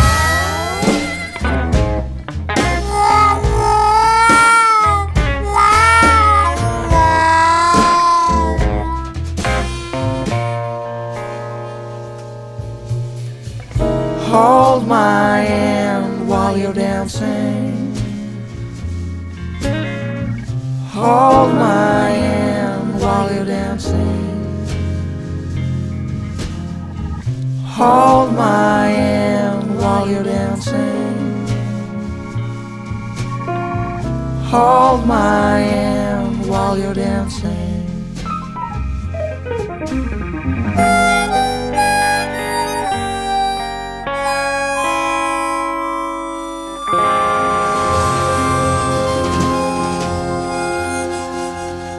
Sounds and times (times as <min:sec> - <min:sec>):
Music: 0:00.0 - 0:51.9.